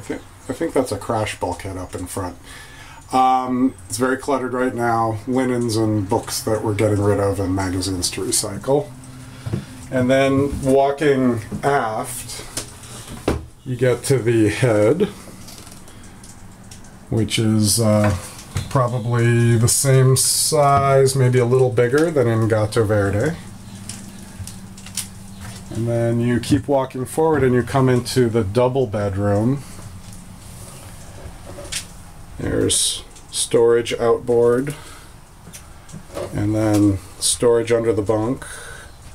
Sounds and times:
Speech: 0:00.0 - 0:02.4, 0:03.1 - 0:08.9, 0:09.9 - 0:12.5, 0:13.6 - 0:15.2, 0:17.1 - 0:23.4, 0:25.7 - 0:29.7, 0:32.4 - 0:34.8, 0:36.3 - 0:38.7.

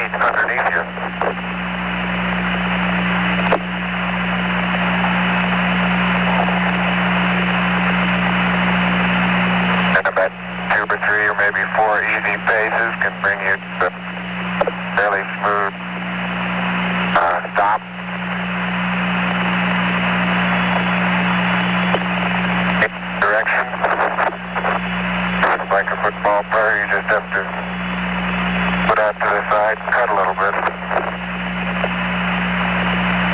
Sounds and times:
Speech: 0:00.0 - 0:01.4, 0:10.0 - 0:14.0, 0:14.9 - 0:15.8, 0:17.2 - 0:17.9, 0:22.8 - 0:24.7, 0:25.4 - 0:27.7, 0:28.9 - 0:31.0.

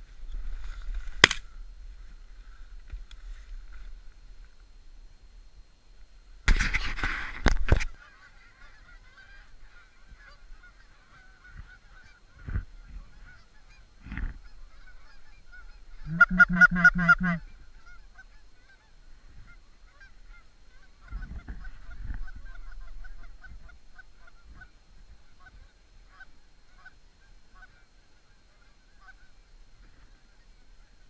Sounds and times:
Honk: 0:06.5 - 0:31.1.

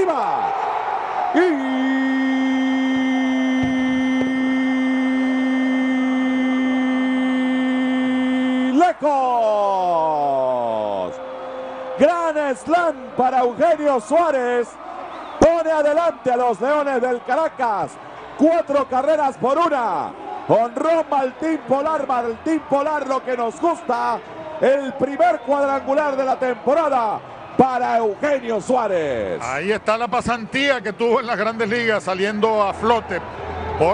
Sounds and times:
Speech: 0:00.0 - 0:00.5, 0:01.4 - 0:03.0, 0:08.5 - 0:11.2, 0:12.0 - 0:14.8, 0:15.4 - 0:33.2.

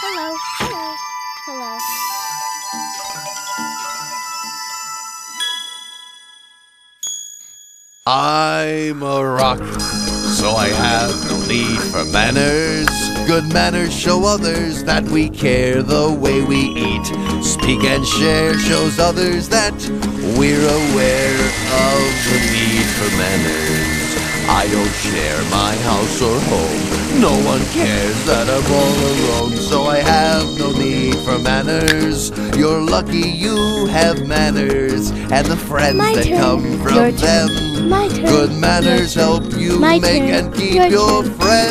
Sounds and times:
Music for children: 0:00.0 - 0:06.8, 0:09.4 - 0:41.7.

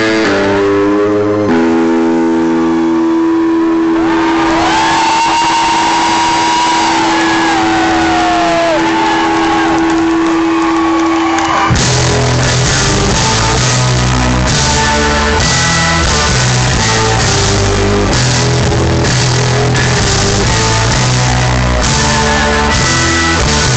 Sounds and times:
Music: 0:00.0 - 0:23.7.

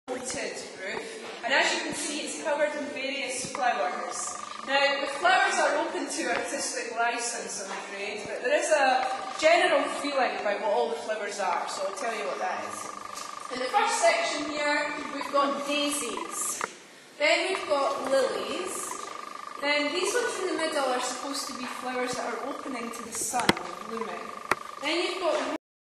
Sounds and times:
Speech: 0:00.1 - 0:12.9, 0:13.5 - 0:19.0, 0:19.6 - 0:25.6.

